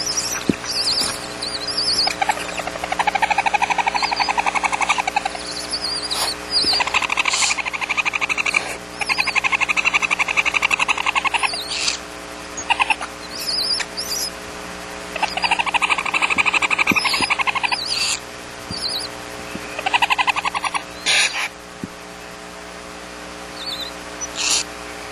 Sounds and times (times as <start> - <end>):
Animal: 0.0 - 14.4, 15.2 - 21.6, 23.5 - 24.8.